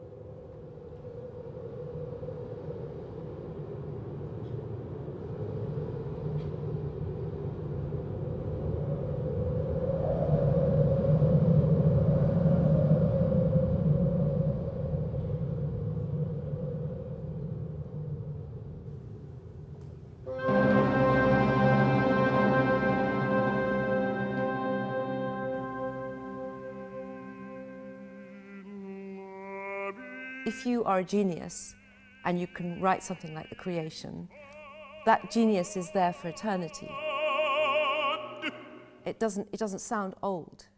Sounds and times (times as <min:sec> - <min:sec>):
Music: 0:20.3 - 0:28.9
Speech: 0:30.4 - 0:37.0, 0:39.1 - 0:40.7.